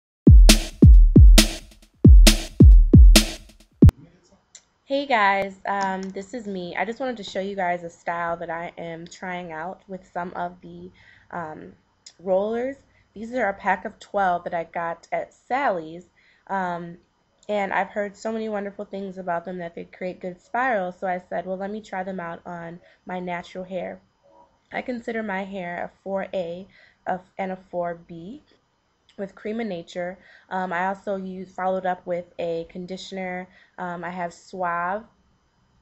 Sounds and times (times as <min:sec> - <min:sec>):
Drum machine: 0:00.3 - 0:03.9
Speech: 0:03.9 - 0:24.0, 0:24.7 - 0:28.5, 0:29.1 - 0:35.2.